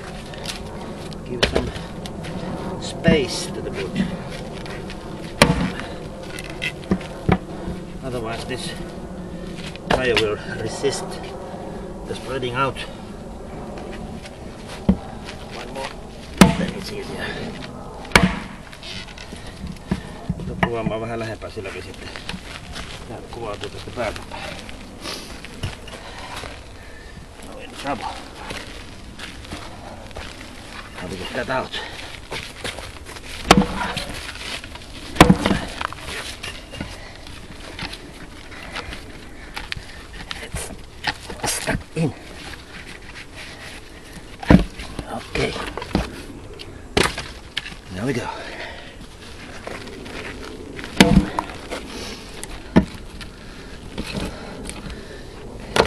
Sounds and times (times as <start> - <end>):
Outside, rural or natural: 0.0 - 55.8
Speech: 2.8 - 4.1, 47.9 - 48.4.